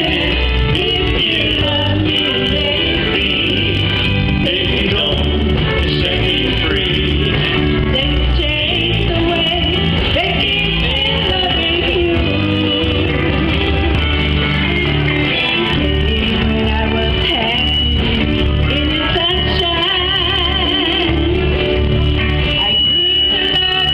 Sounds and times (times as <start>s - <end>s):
Music: 0.0s - 23.9s
Female singing: 7.9s - 13.7s, 16.4s - 21.6s, 22.6s - 23.9s.